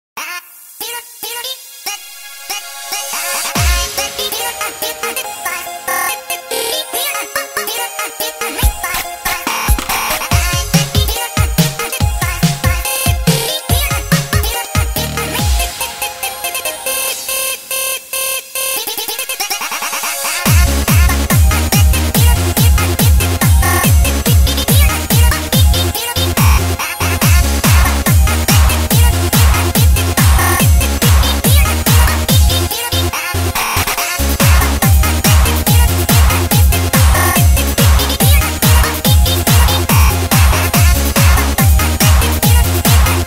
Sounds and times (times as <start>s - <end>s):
Music: 0.2s - 43.2s.